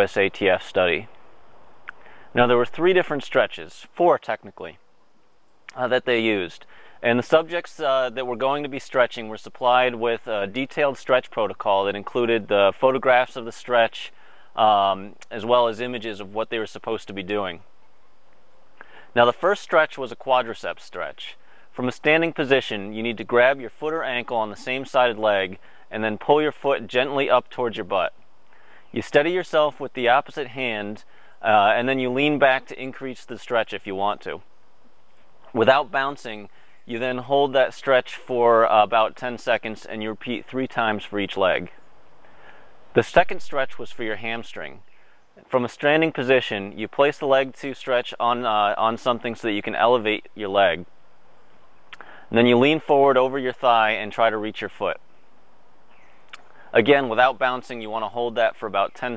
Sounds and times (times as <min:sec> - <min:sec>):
Male speech, man speaking: 0:00.0 - 0:01.1, 0:02.4 - 0:04.8, 0:05.7 - 0:17.6, 0:19.2 - 0:28.2, 0:29.0 - 0:34.4, 0:35.5 - 0:41.8, 0:43.0 - 0:44.8, 0:45.4 - 0:50.9, 0:52.3 - 0:55.0, 0:56.7 - 0:59.1
Outside, rural or natural: 0:00.0 - 0:59.1.